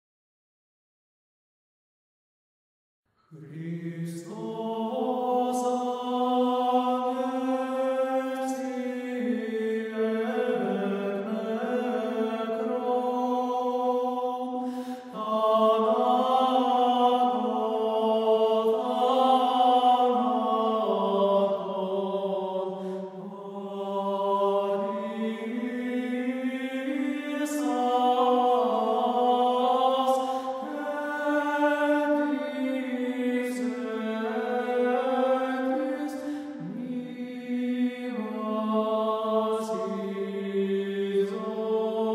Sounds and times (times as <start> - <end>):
Mantra: 3.3 - 42.1.